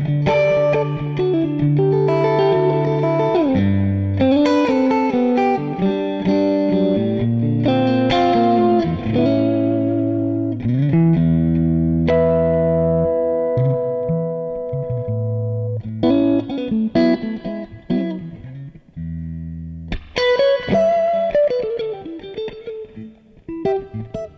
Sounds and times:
Effects unit: 0:00.0 - 0:24.3
Electronic tuner: 0:00.0 - 0:24.3
Guitar: 0:00.0 - 0:24.3.

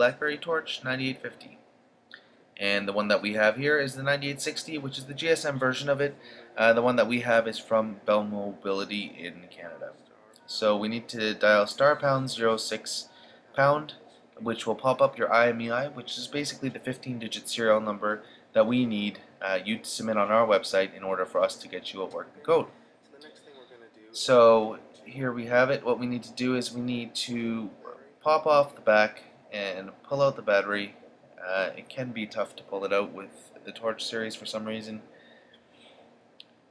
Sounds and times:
Speech: 0:00.0 - 0:01.6, 0:02.6 - 0:35.1.

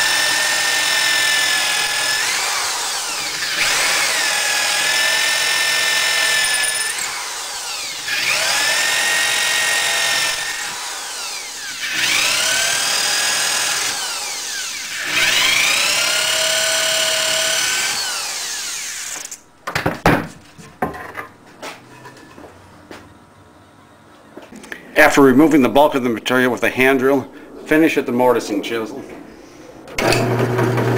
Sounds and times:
Drill: 0:00.0 - 0:19.4, 0:30.0 - 0:30.9.

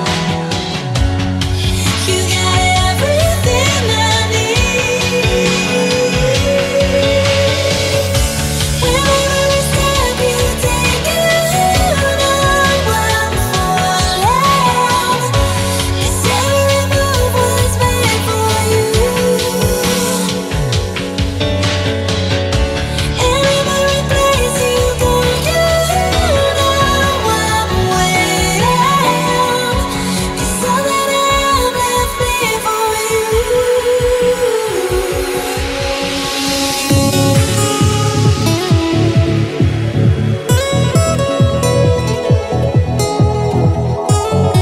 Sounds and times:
Trance music: 0:00.0 - 0:44.6.

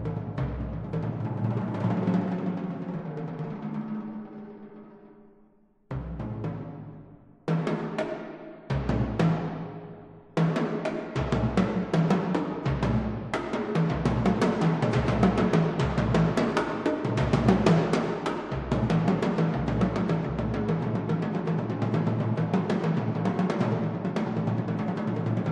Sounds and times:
Drum: 0:08.7 - 0:09.6, 0:10.4 - 0:25.4.

